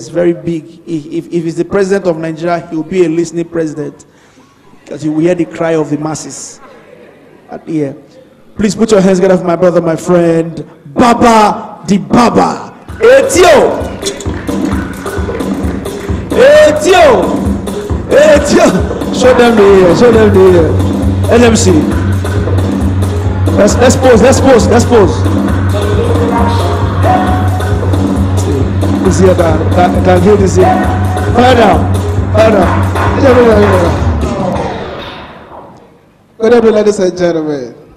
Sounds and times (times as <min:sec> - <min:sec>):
Speech: 0:07.5 - 0:13.8, 0:32.4 - 0:34.0, 0:36.4 - 0:37.8
Music: 0:12.2 - 0:35.8.